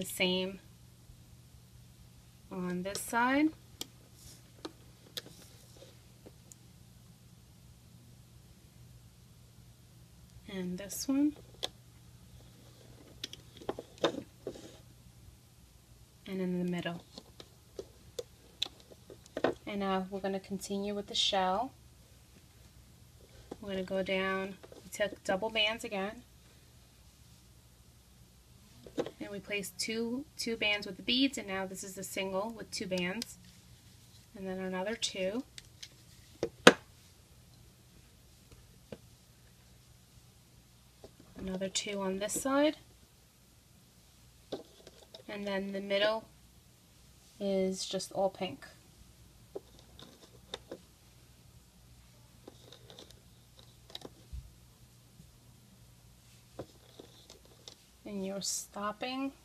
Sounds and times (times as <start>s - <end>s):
Speech: 0.0s - 0.6s, 2.5s - 3.6s, 10.4s - 11.4s, 16.3s - 17.0s, 19.6s - 21.8s, 23.6s - 26.3s, 29.2s - 33.4s, 34.3s - 35.5s, 41.4s - 42.8s, 45.3s - 46.3s, 47.4s - 48.8s, 58.0s - 59.4s.